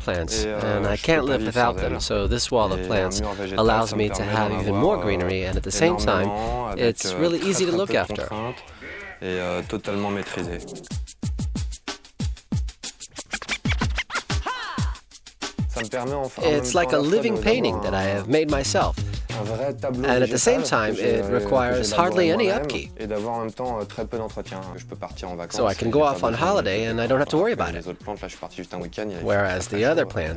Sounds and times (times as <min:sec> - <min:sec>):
Speech: 0:00.0 - 0:10.9, 0:15.8 - 0:30.3
Music: 0:00.0 - 0:30.3.